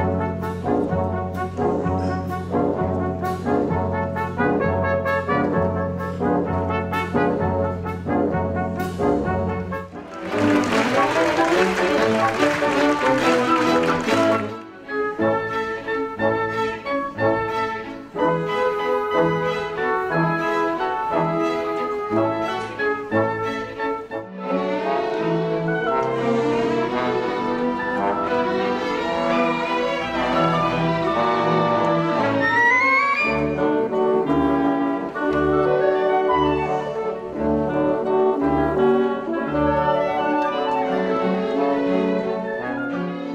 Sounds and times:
Inside, large room or hall: 0:00.0 - 0:43.3
Music: 0:00.0 - 0:43.3.

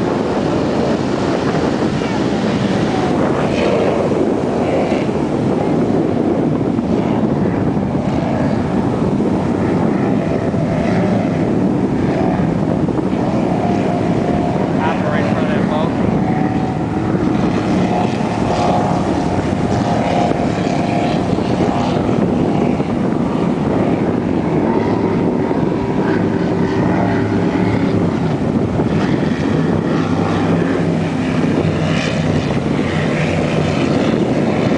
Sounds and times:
Waves, surf: 0:00.0 - 0:34.7.

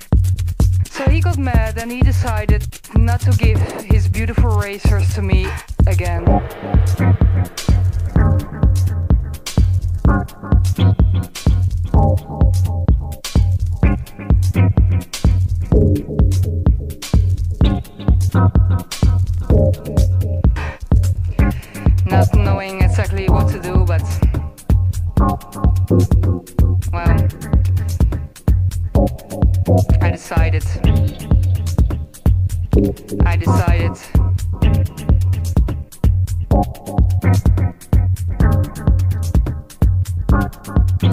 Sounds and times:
Music: 0:00.0 - 0:41.1
Speech: 0:00.9 - 0:06.3, 0:22.0 - 0:24.4, 0:27.0 - 0:27.5, 0:29.9 - 0:31.0, 0:33.2 - 0:34.2.

